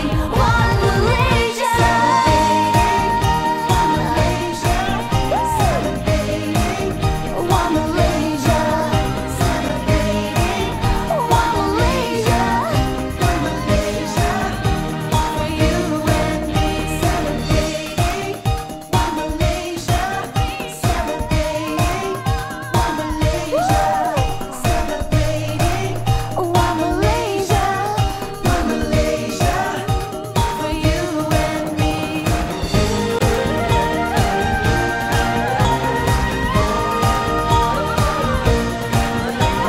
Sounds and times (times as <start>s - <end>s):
Music of Asia: 0.0s - 39.6s.